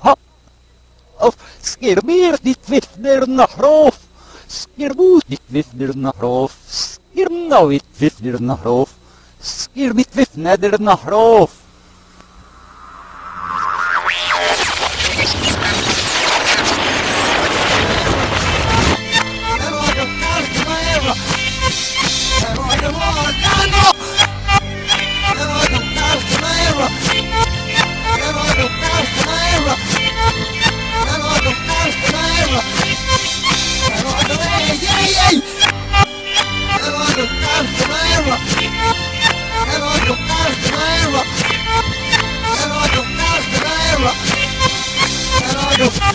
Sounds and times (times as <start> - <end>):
Music: 18.4 - 46.1.